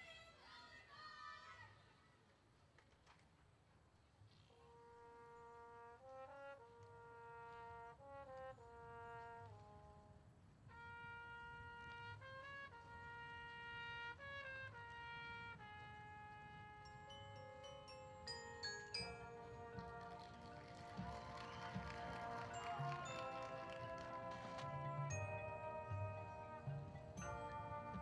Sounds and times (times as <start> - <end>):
Jingle, tinkle: 16.8 - 20.0, 22.5 - 28.0.